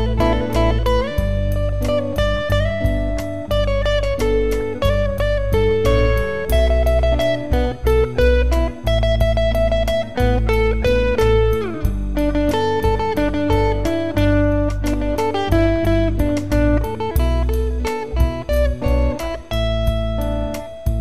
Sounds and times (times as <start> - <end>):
Steel guitar, slide guitar: 0.0 - 21.0.